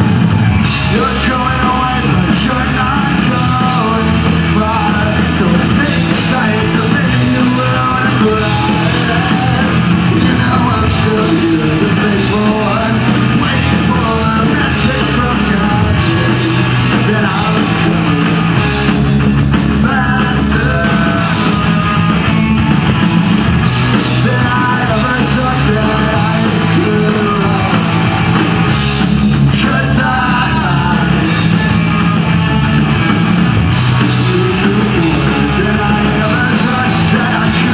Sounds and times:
Music: 0:00.0 - 0:37.7
Singing: 0:00.8 - 0:18.3, 0:24.0 - 0:28.1, 0:29.5 - 0:31.6, 0:34.1 - 0:37.7.

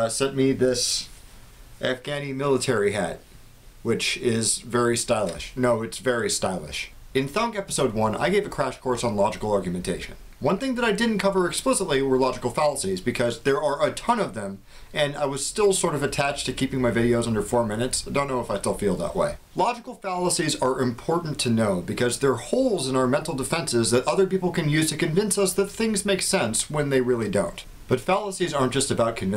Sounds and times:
Speech: 0:00.0 - 0:01.2, 0:01.8 - 0:03.2, 0:03.8 - 0:29.3.

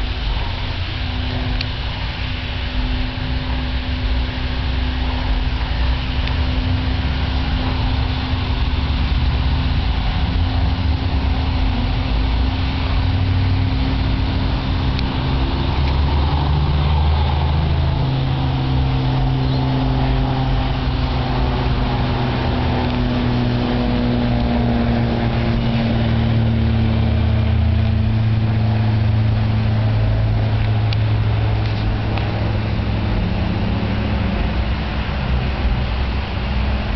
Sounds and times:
Aircraft: 0:00.0 - 0:36.9.

